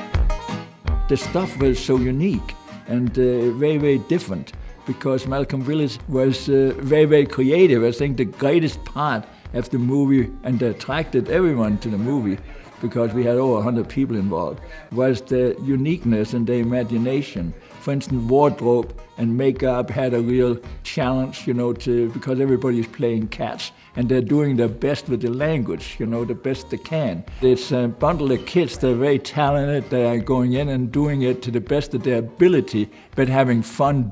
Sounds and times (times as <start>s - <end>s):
Music: 0.0s - 34.1s
Speech: 1.1s - 34.1s.